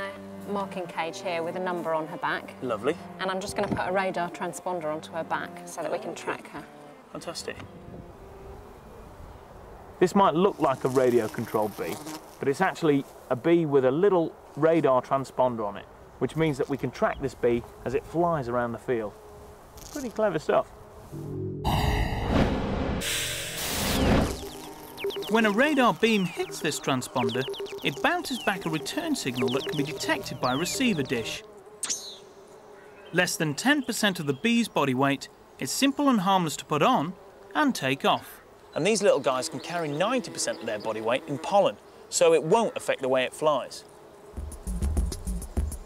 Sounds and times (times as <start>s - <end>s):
Speech: 25.3s - 31.4s, 33.2s - 43.8s.